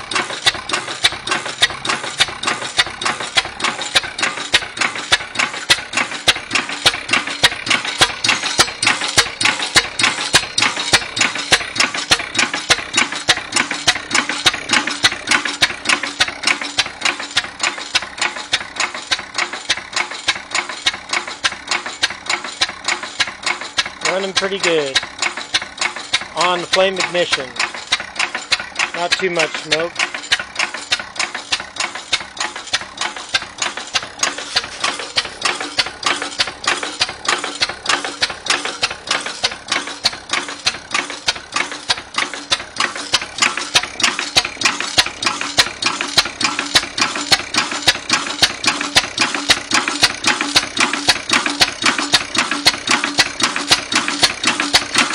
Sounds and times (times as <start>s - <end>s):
Engine: 0.0s - 55.1s
Speech: 24.0s - 25.0s, 26.4s - 27.6s, 28.9s - 29.9s.